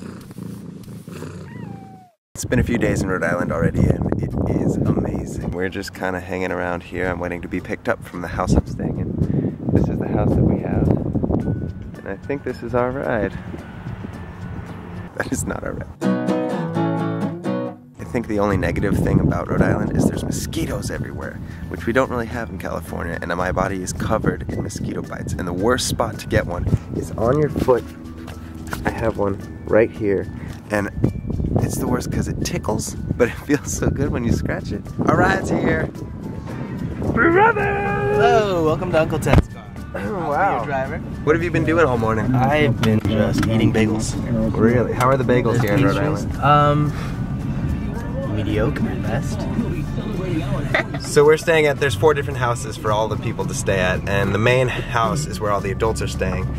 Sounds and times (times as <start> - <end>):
Music: 2.4 - 56.5.